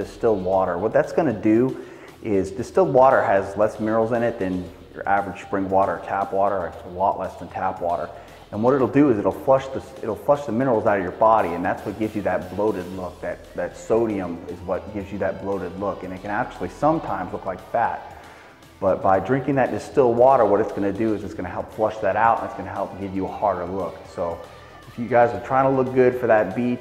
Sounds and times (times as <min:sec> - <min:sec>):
Speech: 0:00.0 - 0:18.1, 0:18.8 - 0:26.8
Music: 0:00.0 - 0:26.8.